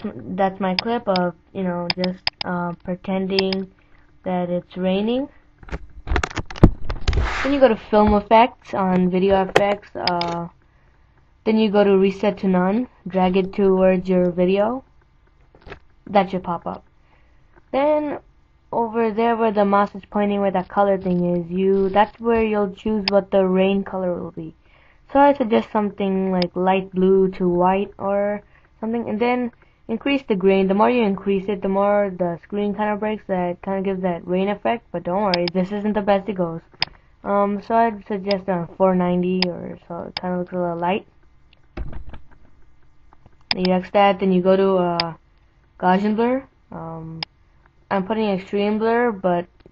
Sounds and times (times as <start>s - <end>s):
Speech: 0.0s - 5.3s, 7.4s - 10.6s, 11.5s - 14.8s, 16.1s - 16.8s, 17.7s - 36.6s, 37.2s - 41.1s, 43.5s - 45.2s, 45.8s - 47.2s, 47.9s - 49.5s.